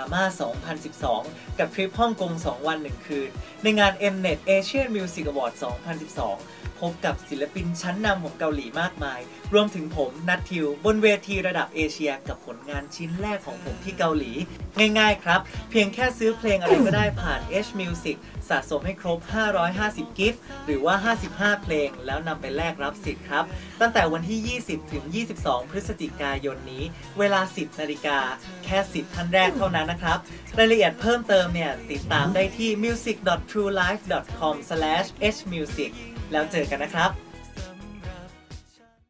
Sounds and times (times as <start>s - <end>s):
Speech: 0.0s - 37.2s
Music: 0.0s - 39.0s.